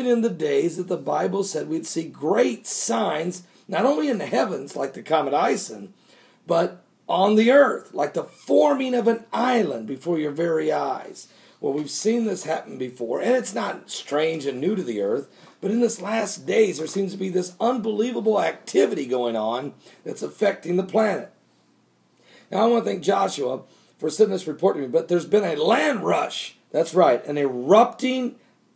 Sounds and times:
Speech: 0.0 - 5.9, 6.5 - 21.4, 22.5 - 28.4.

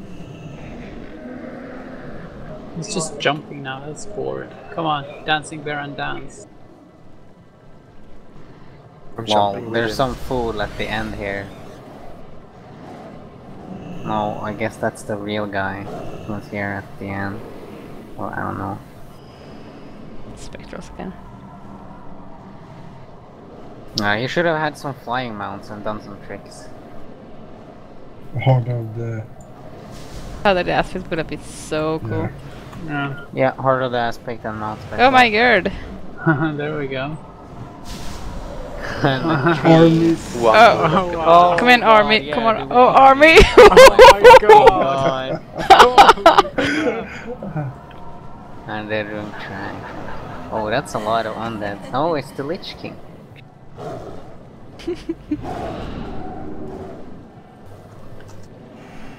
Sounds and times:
Speech: 9.2 - 11.5, 28.4 - 29.3, 30.5 - 32.3, 39.0 - 46.2.

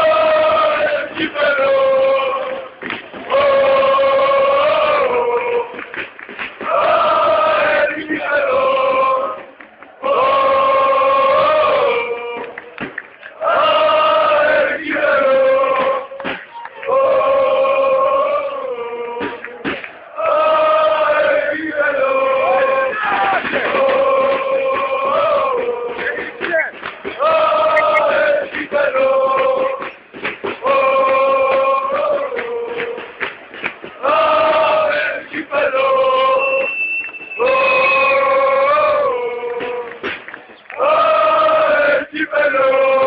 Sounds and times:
Male singing: 0.0 - 5.8, 6.8 - 9.4, 10.0 - 12.5, 13.4 - 16.2, 16.9 - 26.6, 27.2 - 29.9, 30.6 - 33.1, 34.0 - 36.7, 37.4 - 40.1, 40.8 - 43.0
Choir: 0.0 - 43.0
Speech: 26.4 - 26.8.

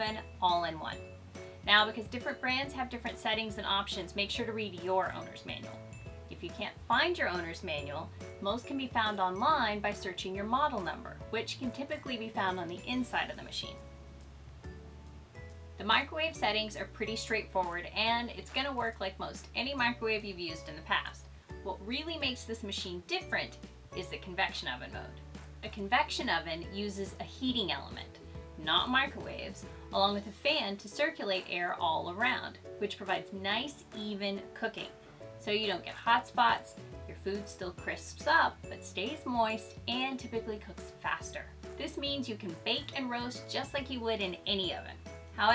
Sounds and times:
Speech: 0.0 - 1.0, 1.7 - 13.8, 15.8 - 45.5
Music: 0.0 - 45.5.

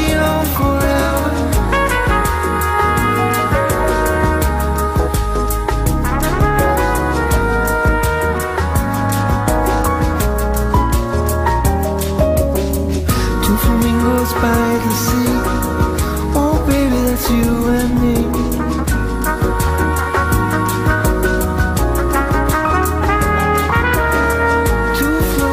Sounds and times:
Singing: 0.0 - 1.8, 13.4 - 20.8, 24.9 - 25.5
Musical instrument: 0.0 - 25.5.

